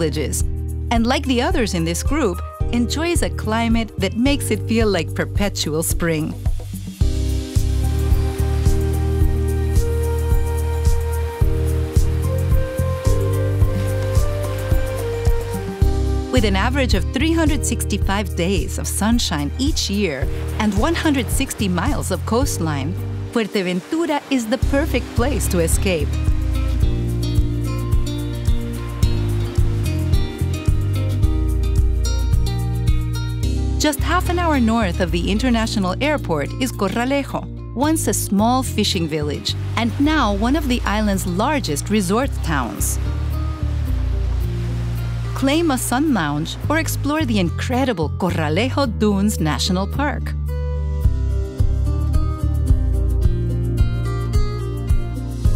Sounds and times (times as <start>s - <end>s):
Speech: 0.0s - 6.4s, 16.3s - 26.2s, 33.8s - 43.0s, 45.4s - 50.4s
Music: 0.0s - 55.5s.